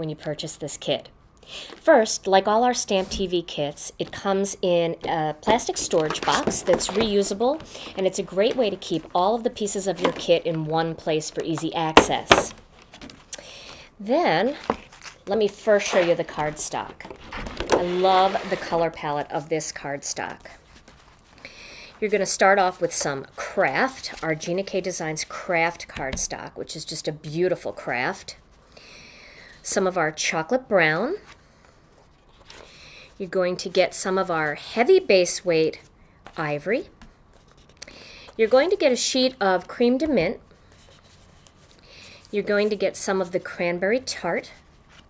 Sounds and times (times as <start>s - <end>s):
Speech: 0.0s - 12.5s, 14.0s - 14.7s, 15.3s - 17.1s, 17.7s - 20.6s, 22.0s - 28.4s, 29.6s - 31.3s, 33.2s - 36.9s, 38.4s - 40.4s, 42.3s - 44.6s.